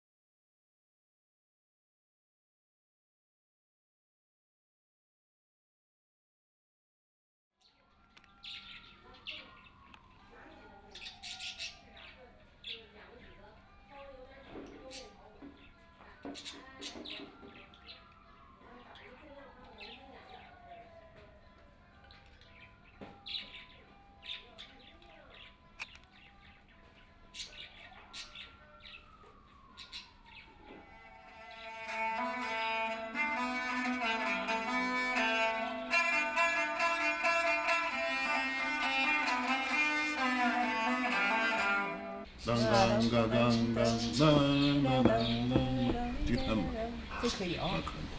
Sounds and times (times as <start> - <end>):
Music: 13.4 - 16.4, 21.0 - 27.4, 30.8 - 47.0.